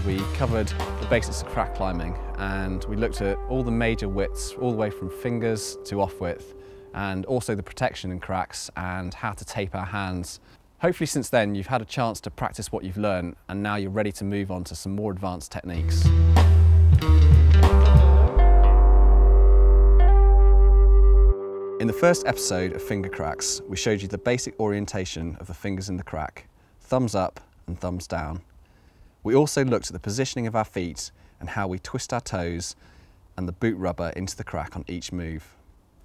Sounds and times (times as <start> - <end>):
Music: 0.0 - 7.4, 15.8 - 24.8
Speech: 0.0 - 16.1, 21.8 - 28.5, 29.2 - 32.8, 33.4 - 35.6.